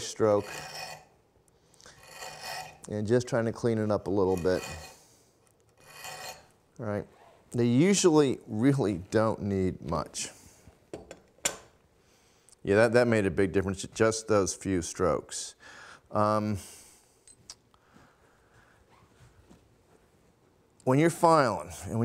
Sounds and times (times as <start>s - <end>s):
Filing (rasp): 0.0s - 1.1s, 1.9s - 2.9s, 4.2s - 5.1s, 5.8s - 6.5s
Rub: 0.4s - 1.1s, 2.0s - 2.8s, 4.3s - 5.0s, 5.8s - 6.5s.